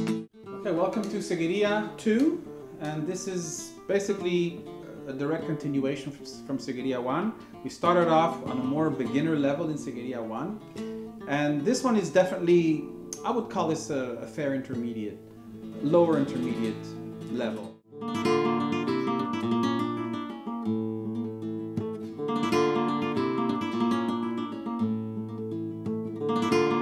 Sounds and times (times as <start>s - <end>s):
Guitar: 0.0s - 26.8s
Speech: 0.6s - 10.6s, 11.3s - 15.2s, 15.8s - 17.8s.